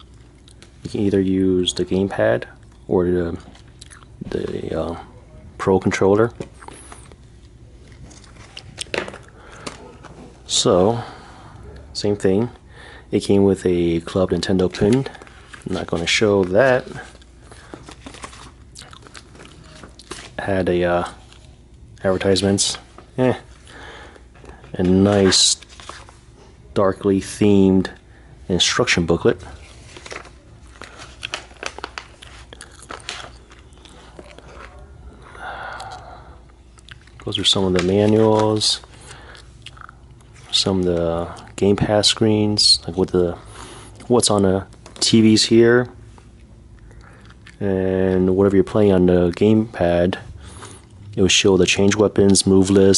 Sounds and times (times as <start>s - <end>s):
Inside, small room: 0.0s - 52.9s
Speech: 0.8s - 3.5s, 4.2s - 6.4s, 10.5s - 17.2s, 20.4s - 21.2s, 22.0s - 23.5s, 24.7s - 25.7s, 26.7s - 29.6s, 37.2s - 38.9s, 40.5s - 43.4s, 44.0s - 46.0s, 47.6s - 50.3s, 51.2s - 52.9s.